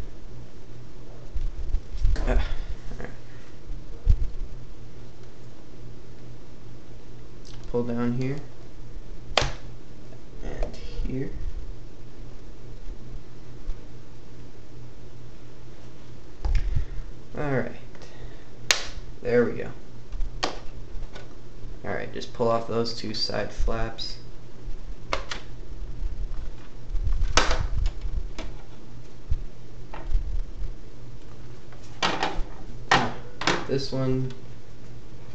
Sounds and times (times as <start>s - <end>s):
Speech: 7.7s - 8.5s, 10.4s - 11.4s, 17.3s - 17.9s, 19.2s - 19.8s, 21.8s - 24.3s, 33.6s - 34.4s.